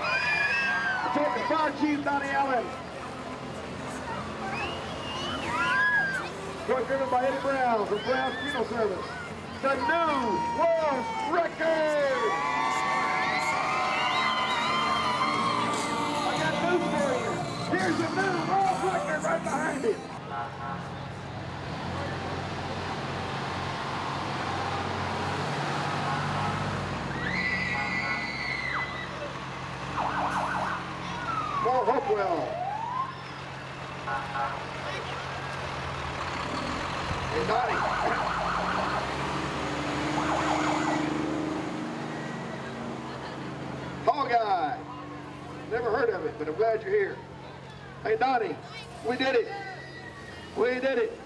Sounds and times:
Emergency vehicle: 0.0 - 51.2
Truck: 0.0 - 51.2.

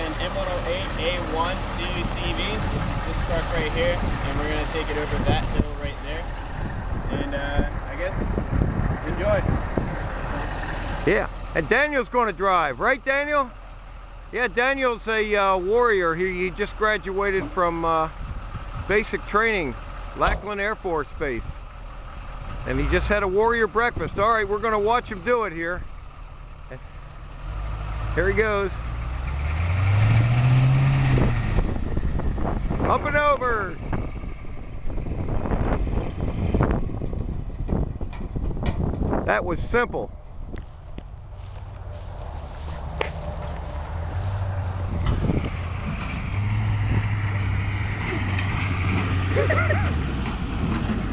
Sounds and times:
Speech: 0.0 - 6.3, 11.1 - 13.5, 14.4 - 18.1, 18.9 - 21.5, 22.6 - 25.8, 28.2 - 28.8, 32.9 - 33.8, 39.3 - 40.1
Truck: 0.0 - 51.1.

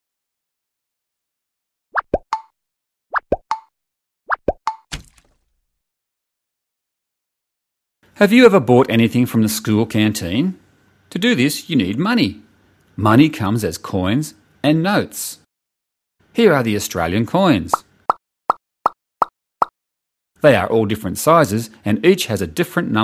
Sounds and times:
Speech: 8.2 - 15.5, 16.3 - 17.9, 20.4 - 23.0.

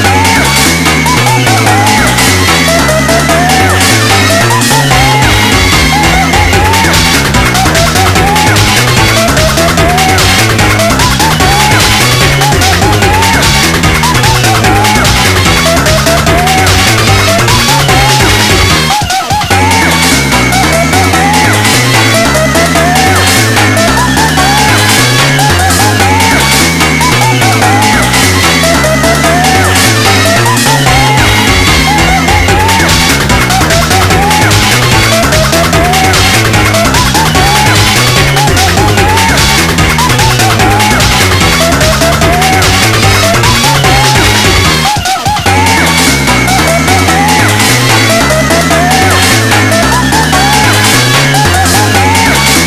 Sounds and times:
Music: 0.0 - 52.6.

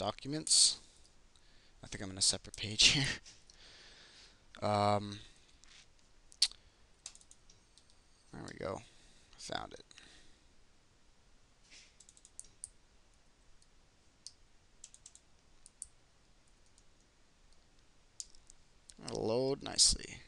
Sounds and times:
Speech: 0.0 - 0.8, 1.8 - 3.2, 4.6 - 5.2, 8.3 - 9.9, 19.0 - 20.2.

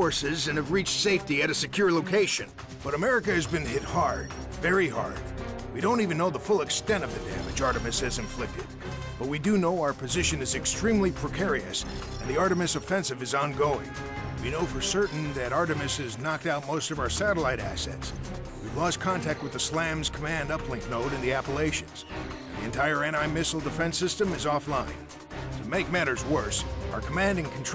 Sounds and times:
Speech: 0.0 - 5.2, 5.8 - 25.0, 25.6 - 27.7
Music: 0.0 - 27.7.

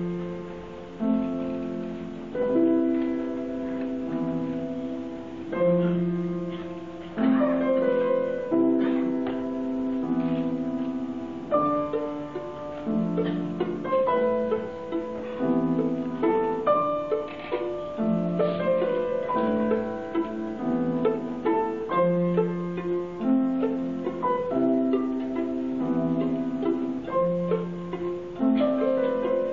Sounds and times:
Violin, fiddle: 0.0 - 29.5.

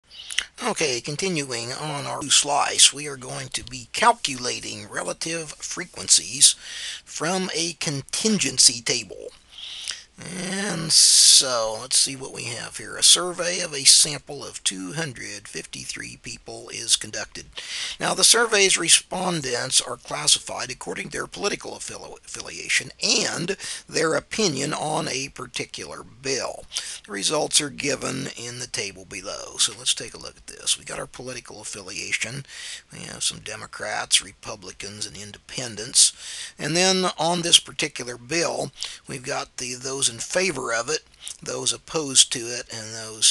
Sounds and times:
Narration, monologue: 0.0 - 43.3.

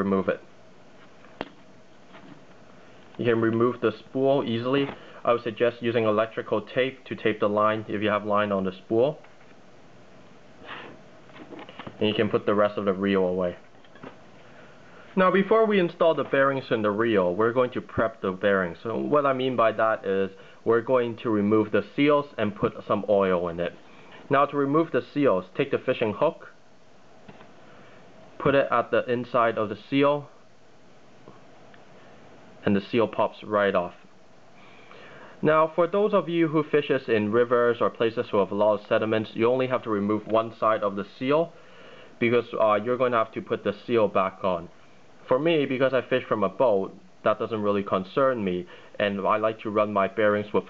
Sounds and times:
Speech: 0.0 - 0.5, 3.2 - 9.3, 12.0 - 13.7, 15.2 - 26.6, 28.4 - 30.4, 32.6 - 34.1, 35.4 - 41.6, 42.2 - 50.6.

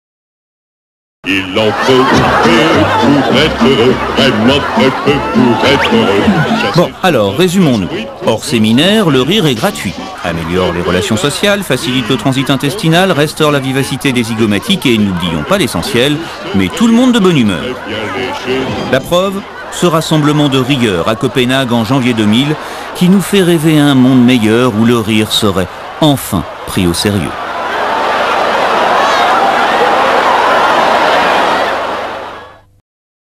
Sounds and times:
Speech: 1.3 - 27.4.

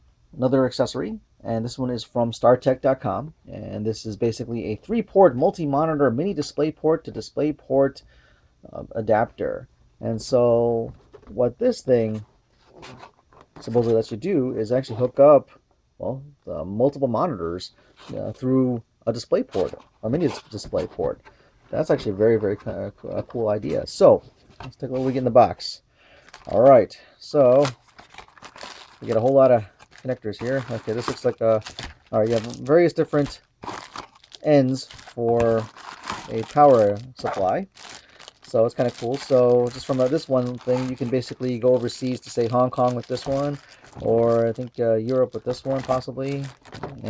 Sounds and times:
Speech: 0.4 - 8.0, 8.6 - 12.3, 13.6 - 25.8, 26.5 - 27.8, 29.0 - 33.4, 34.4 - 37.7, 38.5 - 47.0.

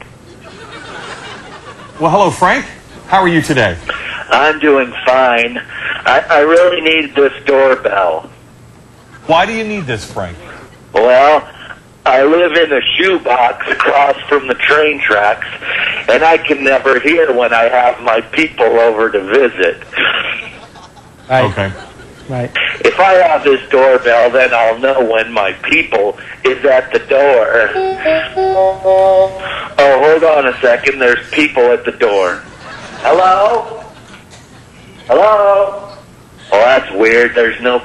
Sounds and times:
Speech: 2.0 - 8.3, 9.2 - 19.9, 21.3 - 27.8, 29.8 - 32.4, 33.0 - 33.9, 35.1 - 37.8
Music: 27.7 - 29.4.

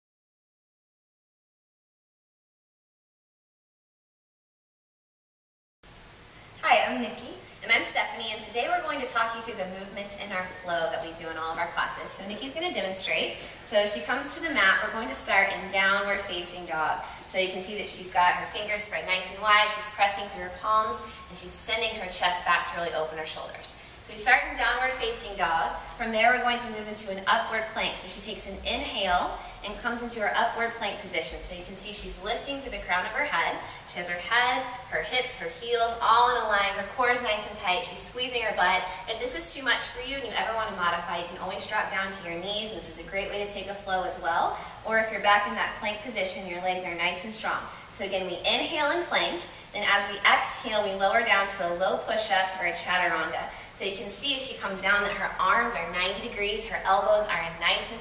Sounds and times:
Speech: 6.6 - 58.0.

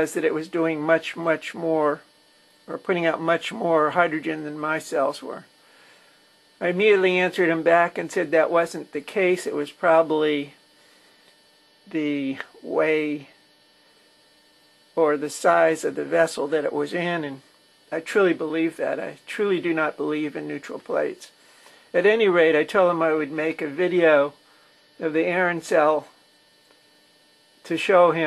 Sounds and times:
Speech: 0.0 - 2.0, 2.7 - 5.5, 6.6 - 10.6, 11.9 - 13.4, 15.0 - 21.3, 22.0 - 24.4, 25.0 - 26.1, 27.6 - 28.2.

